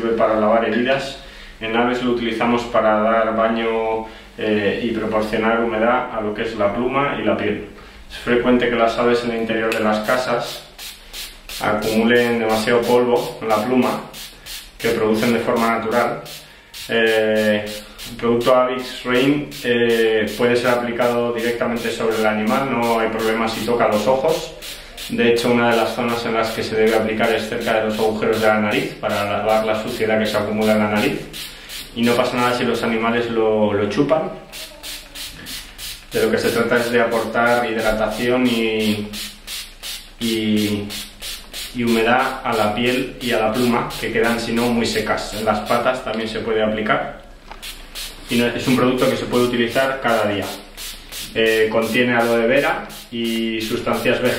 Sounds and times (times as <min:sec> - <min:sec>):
Speech: 0:00.0 - 0:10.6, 0:11.6 - 0:14.1, 0:14.8 - 0:16.3, 0:16.9 - 0:31.3, 0:32.0 - 0:35.3, 0:36.2 - 0:39.2, 0:40.2 - 0:40.9, 0:41.8 - 0:47.2, 0:48.3 - 0:50.6, 0:51.3 - 0:54.3.